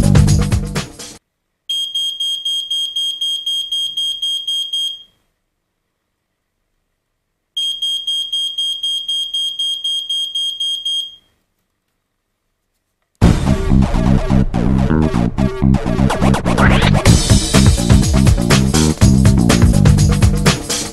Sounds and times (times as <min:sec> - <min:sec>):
Music: 0:00.0 - 0:01.2, 0:13.2 - 0:20.9
Alarm: 0:01.7 - 0:05.2, 0:07.6 - 0:11.3.